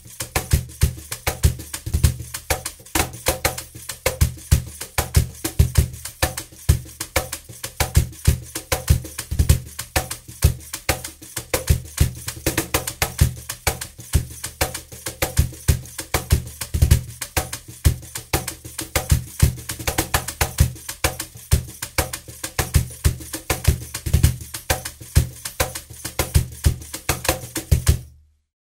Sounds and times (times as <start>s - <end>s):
Wood block: 0.0s - 28.1s.